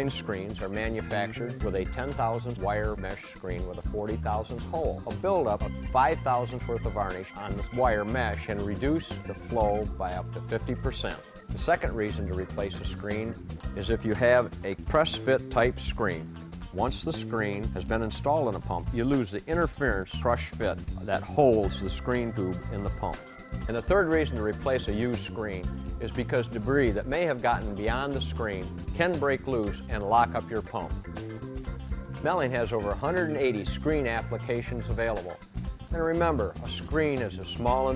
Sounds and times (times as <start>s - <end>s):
Speech: 0.0s - 16.2s, 16.8s - 31.0s, 32.2s - 37.9s
Music: 0.0s - 37.9s.